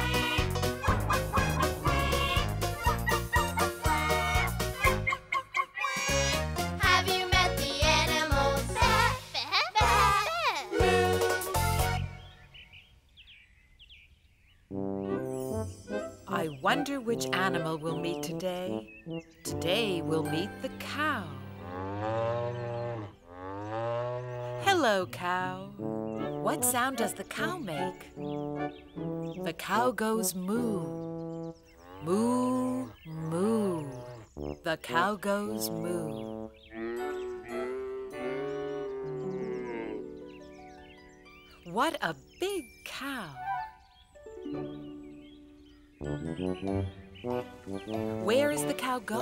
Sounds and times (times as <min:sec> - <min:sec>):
Music: 0:00.0 - 0:12.5, 0:14.7 - 0:21.6, 0:24.6 - 0:31.7, 0:33.9 - 0:49.2
Speech: 0:16.3 - 0:18.8, 0:19.5 - 0:21.4, 0:24.6 - 0:25.8, 0:26.4 - 0:28.1, 0:29.4 - 0:30.9, 0:32.0 - 0:34.0, 0:34.7 - 0:36.2, 0:41.7 - 0:43.5, 0:48.2 - 0:49.2.